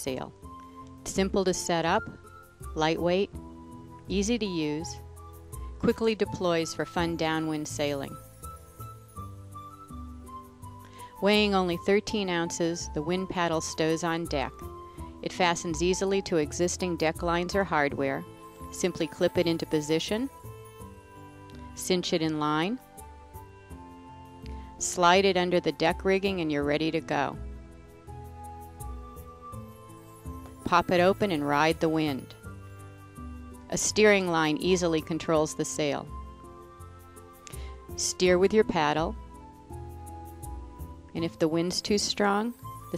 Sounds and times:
Speech: 0:00.0 - 0:00.3, 0:01.1 - 0:02.1, 0:02.8 - 0:03.3, 0:04.1 - 0:05.0, 0:05.8 - 0:08.2, 0:11.2 - 0:14.6, 0:15.2 - 0:18.2, 0:18.8 - 0:20.3, 0:21.8 - 0:22.8, 0:24.8 - 0:27.4, 0:30.7 - 0:32.3, 0:33.7 - 0:36.1, 0:38.0 - 0:39.2, 0:41.2 - 0:42.9
Music: 0:00.0 - 0:42.9.

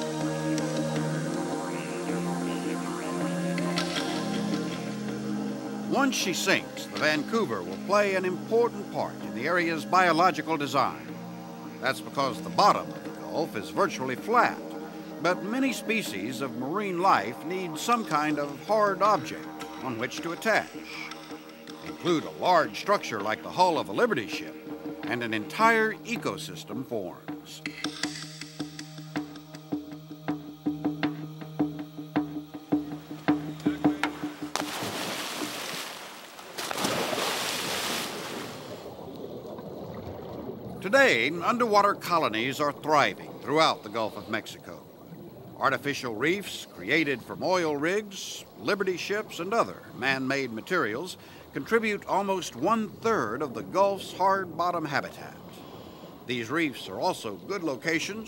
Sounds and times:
Music: 0:00.0 - 0:35.7, 0:39.4 - 0:58.2
Outside, rural or natural: 0:00.0 - 0:58.2
Speech: 0:05.9 - 0:11.0, 0:11.8 - 0:14.6, 0:15.2 - 0:21.1, 0:22.0 - 0:24.5, 0:25.1 - 0:27.7, 0:40.8 - 0:44.8, 0:45.6 - 0:55.6, 0:56.3 - 0:58.2.

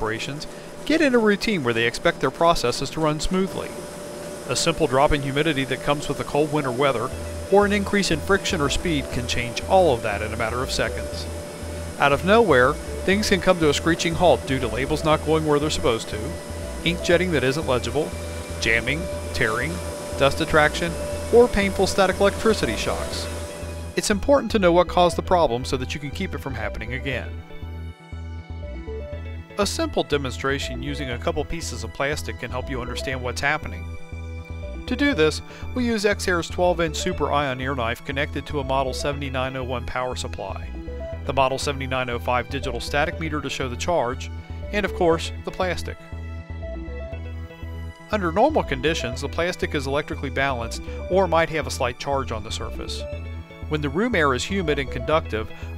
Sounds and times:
Speech: 0:00.0 - 0:03.8, 0:04.5 - 0:11.3, 0:12.0 - 0:23.3, 0:24.0 - 0:27.4, 0:29.6 - 0:33.8, 0:34.9 - 0:40.7, 0:41.3 - 0:46.0, 0:48.1 - 0:53.1, 0:53.7 - 0:55.6
Music: 0:00.0 - 0:55.7.

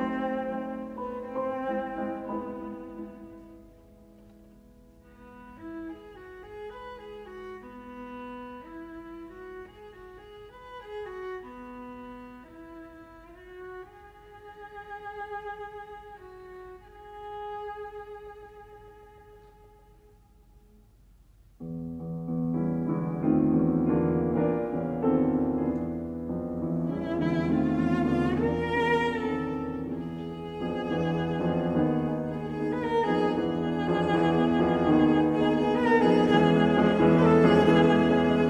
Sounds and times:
Cello: 0:00.0 - 0:38.4.

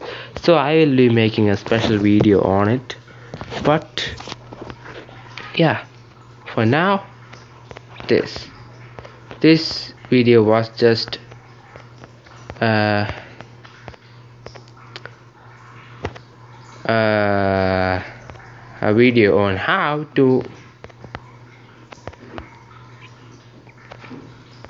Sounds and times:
Speech: 0:00.4 - 0:03.0, 0:03.6 - 0:04.2, 0:05.5 - 0:05.9, 0:06.5 - 0:07.1, 0:08.0 - 0:08.5, 0:09.4 - 0:11.2, 0:12.6 - 0:13.2, 0:16.9 - 0:18.1, 0:18.8 - 0:20.6.

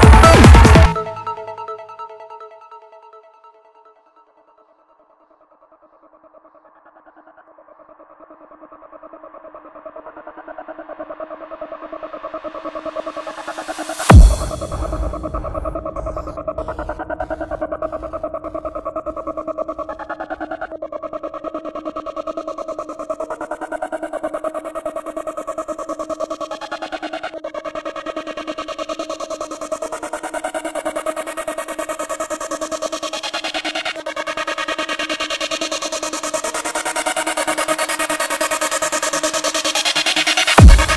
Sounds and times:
Trance music: 0:00.0 - 0:40.9.

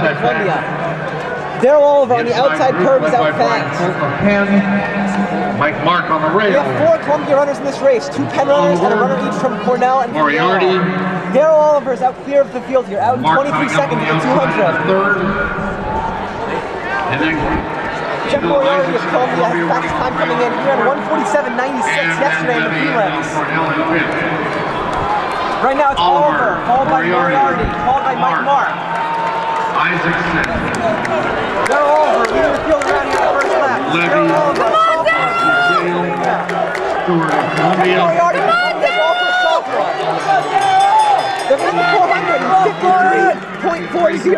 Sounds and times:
Speech: 0:00.0 - 0:00.6, 0:01.6 - 0:04.8, 0:05.6 - 0:15.4, 0:18.3 - 0:24.4, 0:25.6 - 0:28.7, 0:29.8 - 0:36.4, 0:37.1 - 0:40.5, 0:41.5 - 0:44.3.

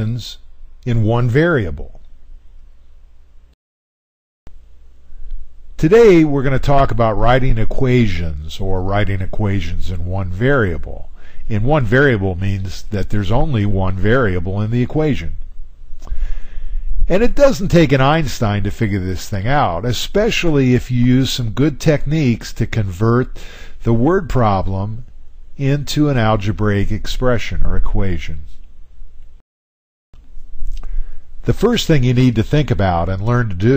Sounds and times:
Speech: 0:00.0 - 0:02.0, 0:05.8 - 0:15.4, 0:17.1 - 0:28.6, 0:31.4 - 0:33.7.

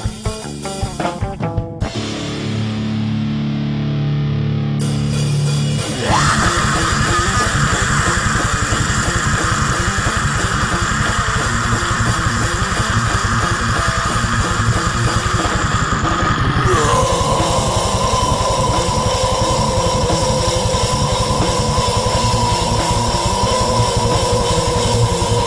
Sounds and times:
Bass guitar: 0:00.0 - 0:25.4
Electric guitar: 0:00.0 - 0:25.4
Strum: 0:00.0 - 0:25.4.

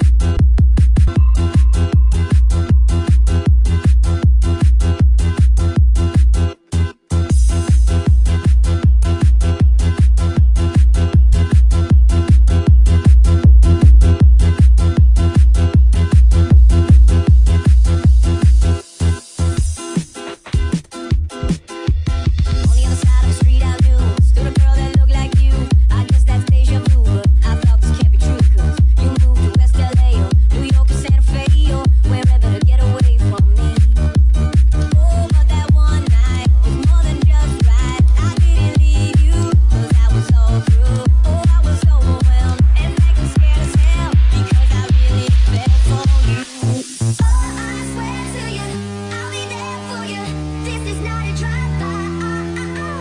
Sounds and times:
Techno: 0:00.0 - 0:53.0.

